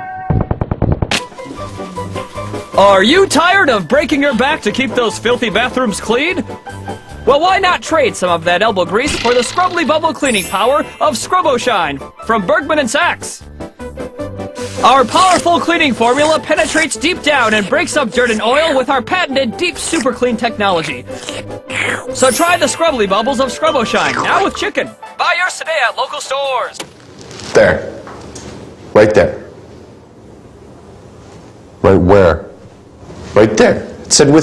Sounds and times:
Music: 1.1 - 26.8
Speech: 2.8 - 6.4, 7.3 - 13.4, 14.8 - 21.1, 22.2 - 26.8, 33.4 - 34.4.

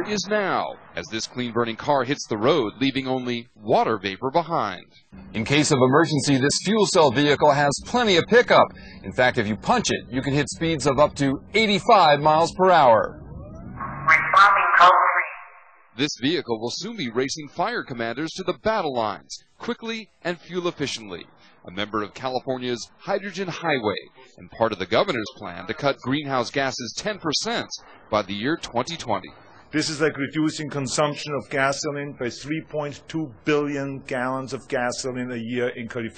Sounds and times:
Speech: 0.0 - 13.2, 14.1 - 15.4, 16.0 - 36.1.

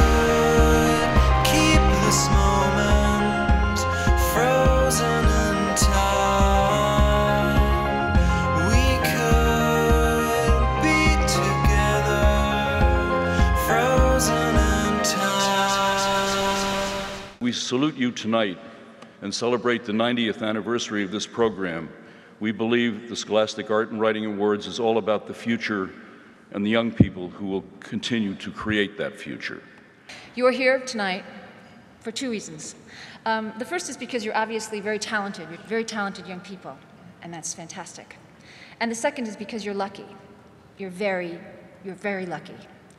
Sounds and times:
Music: 0.0 - 17.4
Speech: 17.4 - 18.6, 19.2 - 29.6, 40.8 - 42.6.

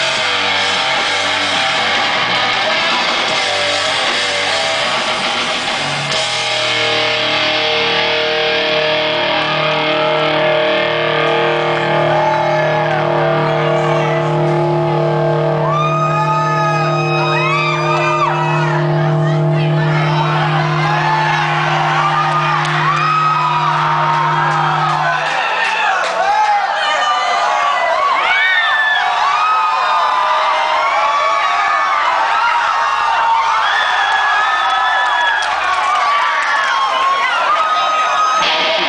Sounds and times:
Inside, large room or hall: 0.0 - 38.8.

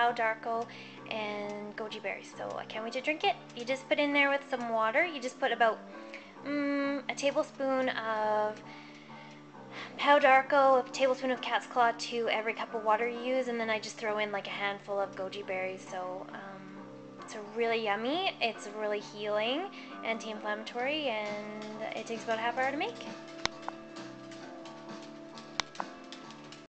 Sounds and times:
Speech: 0.0 - 5.8, 6.5 - 8.6, 9.9 - 23.2
Music: 0.0 - 26.7.

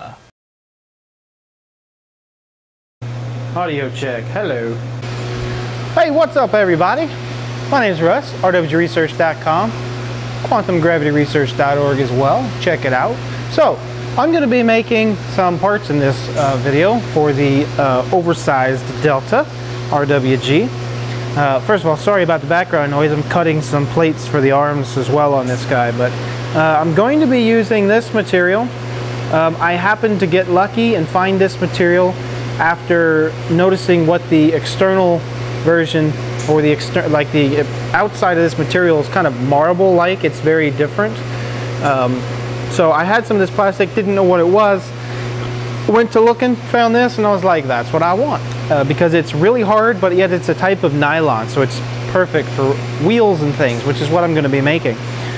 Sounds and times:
Speech: 0.0 - 0.3, 3.6 - 4.8, 6.0 - 9.8, 10.4 - 20.8, 21.4 - 45.0, 45.9 - 55.0.

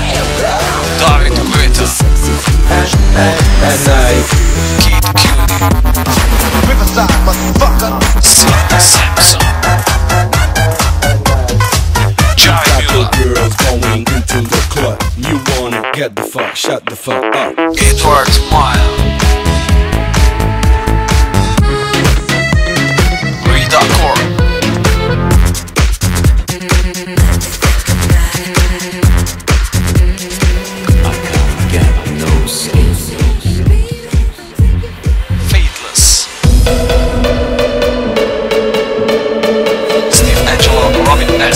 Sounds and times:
New-age music: 0.0 - 16.3, 17.1 - 41.5
Dance music: 0.0 - 41.5
Soundtrack music: 0.0 - 41.5.

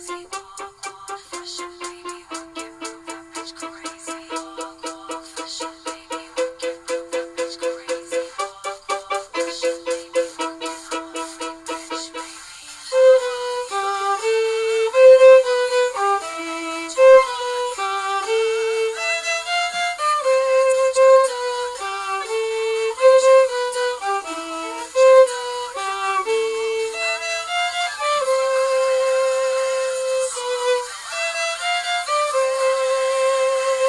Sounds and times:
Violin, fiddle: 0.0 - 33.8.

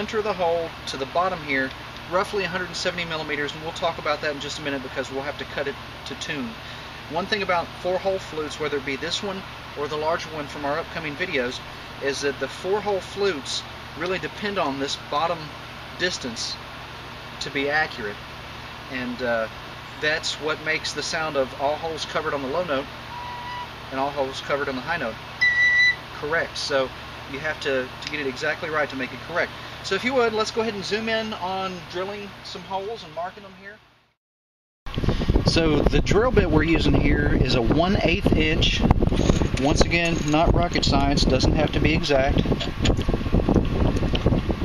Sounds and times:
Speech: 0.0 - 16.6, 17.4 - 18.2, 18.9 - 22.9, 23.9 - 25.2, 26.2 - 33.8, 35.5 - 38.9, 39.6 - 42.5.

